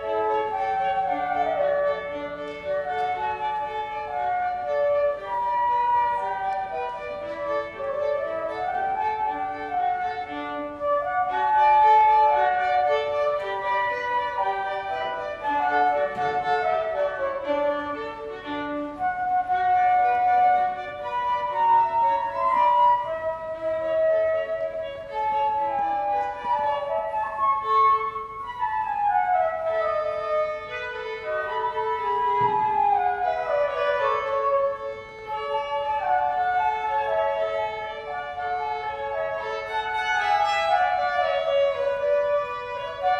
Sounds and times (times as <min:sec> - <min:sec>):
Flute: 0:00.0 - 0:43.1
Violin, fiddle: 0:00.0 - 0:43.1.